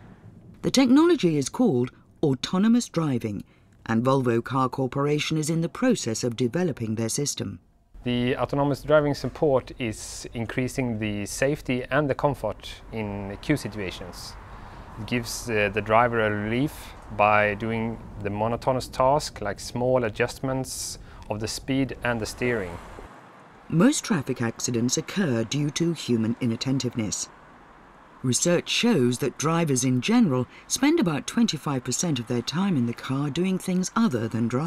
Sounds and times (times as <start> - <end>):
Narration, monologue: 0.0 - 34.6.